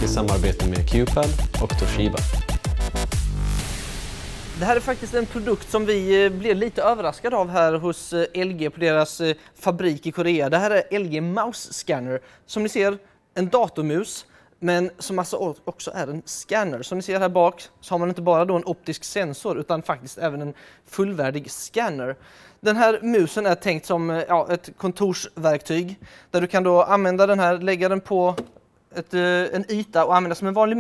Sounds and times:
Speech: 0:00.0 - 0:02.3, 0:04.6 - 0:30.8.

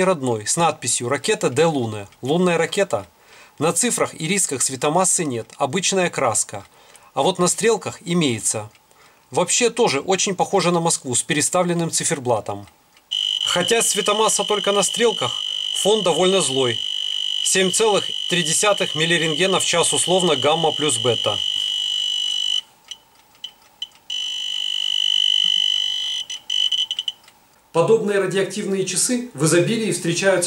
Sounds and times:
Speech: 0:00.0 - 0:12.7, 0:13.5 - 0:16.8, 0:17.5 - 0:21.5, 0:27.8 - 0:30.4.

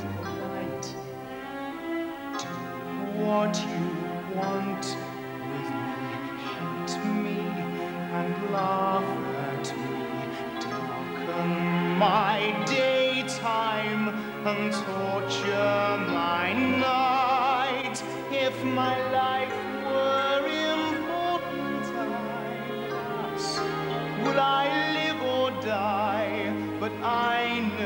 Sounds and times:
Music: 0:00.0 - 0:27.8.

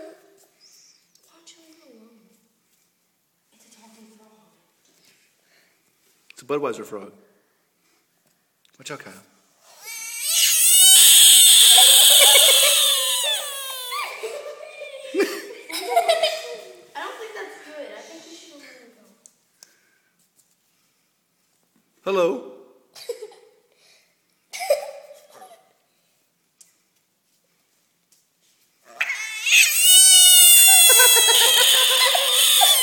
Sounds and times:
Frog: 0:09.9 - 0:13.9, 0:29.0 - 0:32.8.

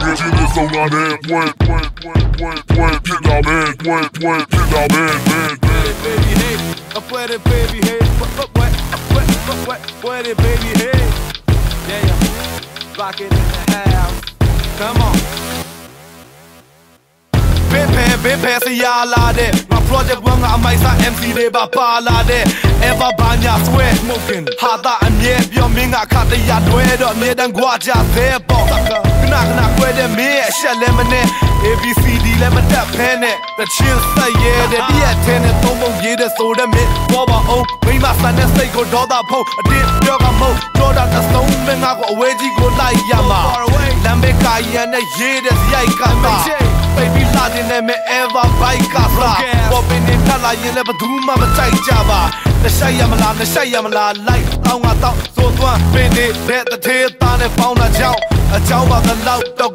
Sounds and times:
Music: 0:00.0 - 0:59.7.

